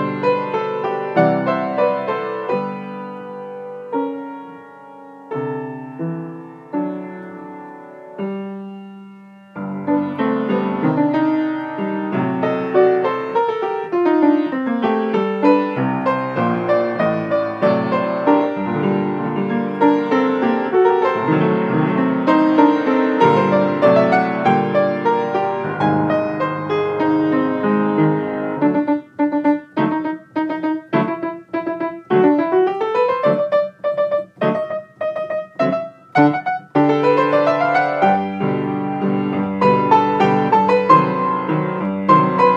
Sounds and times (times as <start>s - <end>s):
Music: 0.0s - 42.5s.